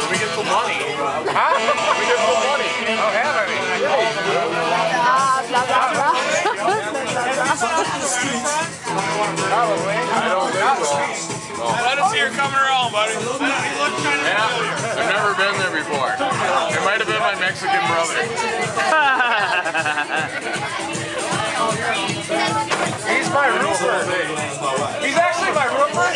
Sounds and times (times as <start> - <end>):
Music: 0.0 - 26.1.